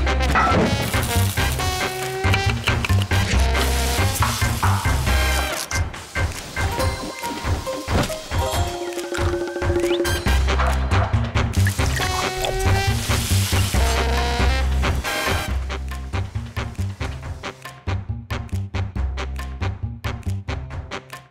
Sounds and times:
Music: 0.0s - 21.3s.

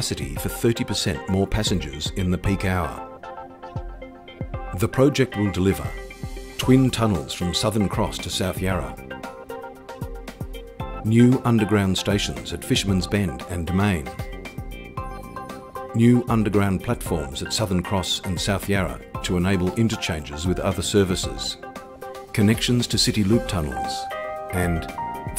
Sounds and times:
Speech: 0.0s - 3.1s, 4.8s - 6.0s, 6.6s - 9.0s, 11.0s - 14.3s, 16.0s - 21.6s, 22.3s - 25.3s
Music: 0.0s - 25.3s.

